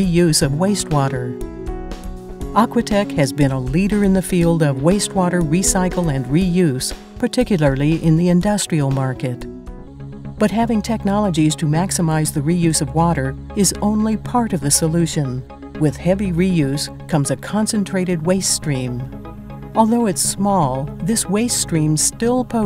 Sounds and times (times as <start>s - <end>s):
Speech: 0.0s - 1.4s, 2.6s - 9.5s, 10.4s - 19.1s, 19.8s - 22.6s
Music: 0.0s - 22.6s.